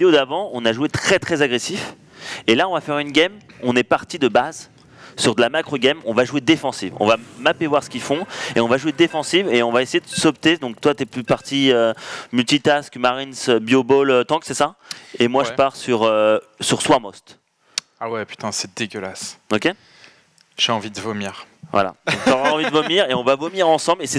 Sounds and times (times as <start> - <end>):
Speech: 0.0 - 17.4, 18.0 - 19.8, 20.6 - 24.1.